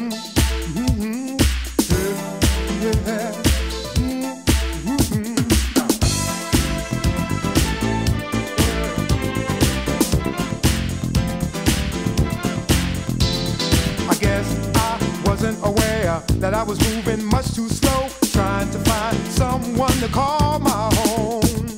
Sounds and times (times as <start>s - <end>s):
Music: 0.0s - 21.7s.